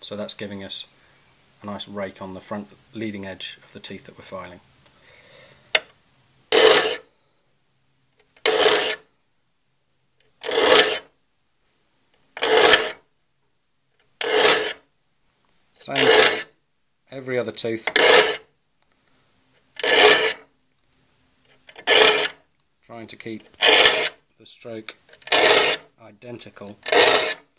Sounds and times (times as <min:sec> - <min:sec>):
Wood: 0:06.5 - 0:07.0, 0:08.2 - 0:09.0, 0:10.4 - 0:11.0, 0:12.4 - 0:13.0, 0:14.1 - 0:14.8, 0:15.9 - 0:16.5, 0:17.8 - 0:18.4, 0:19.8 - 0:20.4, 0:21.5 - 0:22.4, 0:23.4 - 0:24.2, 0:24.9 - 0:25.9, 0:26.7 - 0:27.4
Filing (rasp): 0:06.5 - 0:07.1, 0:08.4 - 0:09.1, 0:10.4 - 0:11.1, 0:12.4 - 0:13.0, 0:14.2 - 0:14.8, 0:15.9 - 0:16.5, 0:17.9 - 0:18.5, 0:19.8 - 0:20.4, 0:21.7 - 0:22.4, 0:23.5 - 0:24.2, 0:25.2 - 0:25.9, 0:26.8 - 0:27.5.